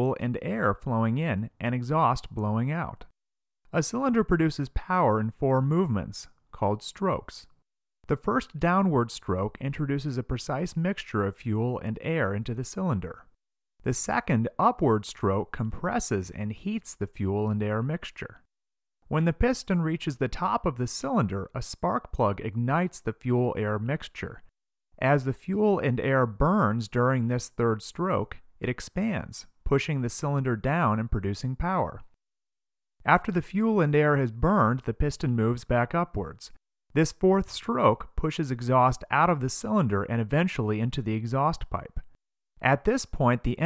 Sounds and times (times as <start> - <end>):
Speech: 0.0 - 3.1, 3.7 - 18.4, 19.1 - 32.1, 33.0 - 43.6.